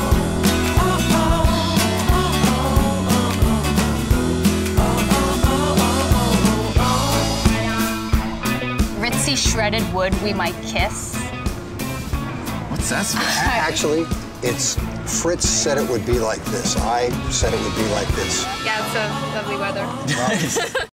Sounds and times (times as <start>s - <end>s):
Music: 0.0s - 20.9s.